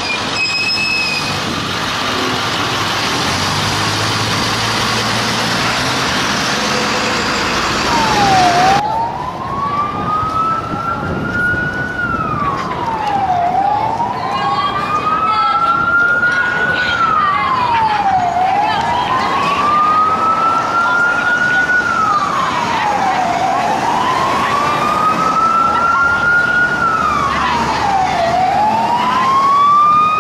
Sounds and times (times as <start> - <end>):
Police car (siren): 7.6 - 30.2.